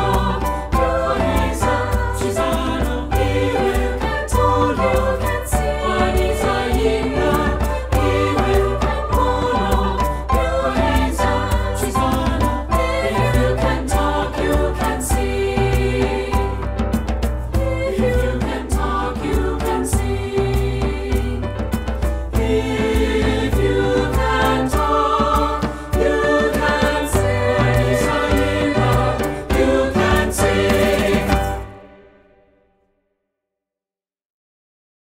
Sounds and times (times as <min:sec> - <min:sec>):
Music: 0:00.0 - 0:33.5
Singing: 0:22.4 - 0:31.8.